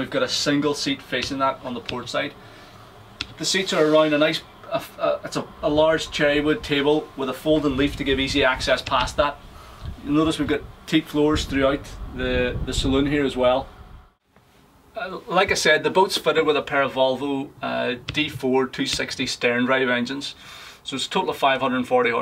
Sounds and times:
Speech: 0.0s - 2.4s, 3.4s - 9.4s, 10.0s - 13.7s, 15.0s - 22.2s.

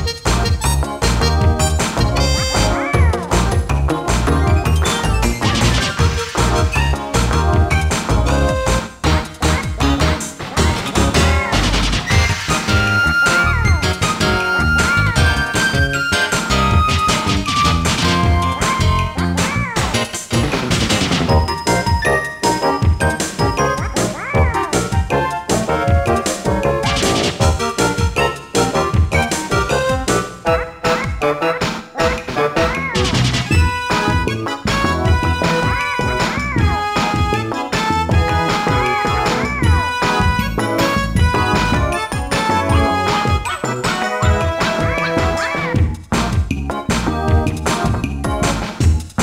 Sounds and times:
Music: 0.0s - 49.2s
Smash, crash: 5.4s - 6.6s, 19.8s - 21.4s, 26.8s - 27.7s.

